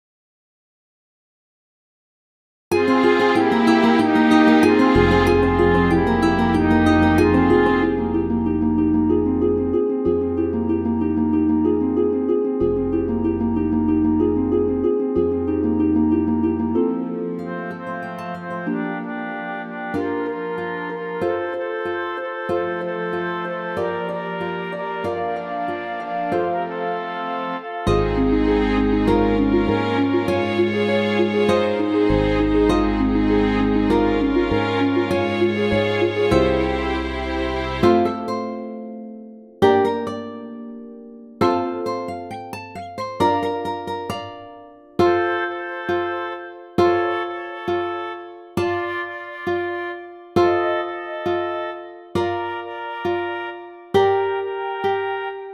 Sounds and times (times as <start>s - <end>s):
Music: 2.7s - 55.5s.